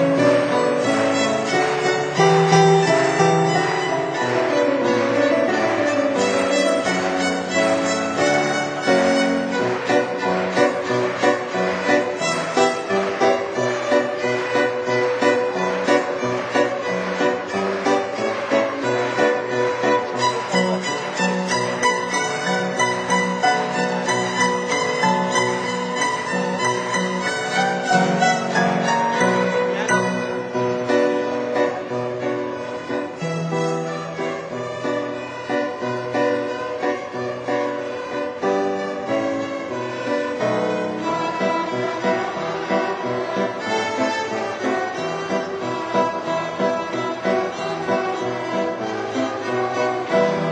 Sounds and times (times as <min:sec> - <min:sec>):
Violin, fiddle: 0:00.0 - 0:50.5.